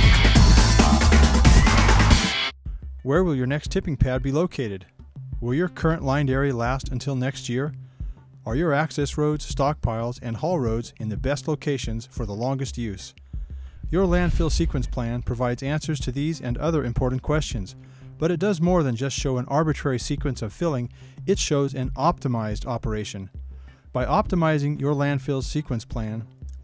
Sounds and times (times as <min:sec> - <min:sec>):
Music: 0:00.0 - 0:26.6
Speech: 0:03.0 - 0:07.8, 0:08.4 - 0:13.2, 0:13.9 - 0:23.3, 0:24.0 - 0:26.3.